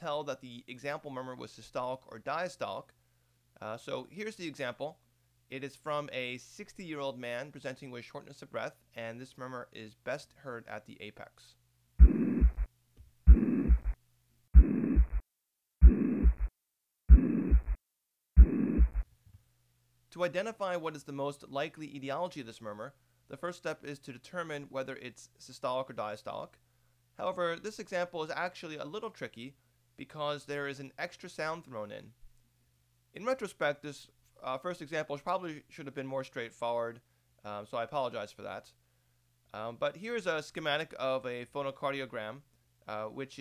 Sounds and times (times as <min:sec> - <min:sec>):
Speech: 0:00.0 - 0:03.0, 0:03.6 - 0:11.6, 0:20.1 - 0:26.6, 0:27.2 - 0:32.2, 0:33.1 - 0:38.8, 0:39.5 - 0:43.4.